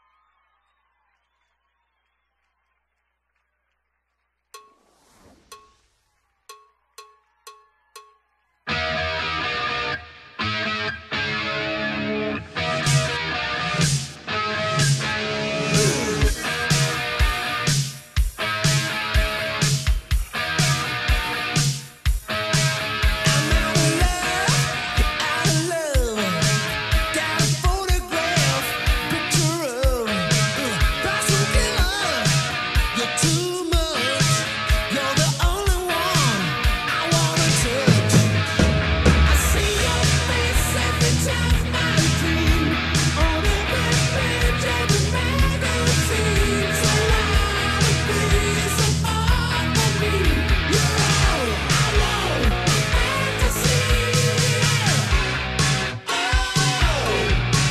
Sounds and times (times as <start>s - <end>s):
Electric guitar: 8.7s - 57.7s.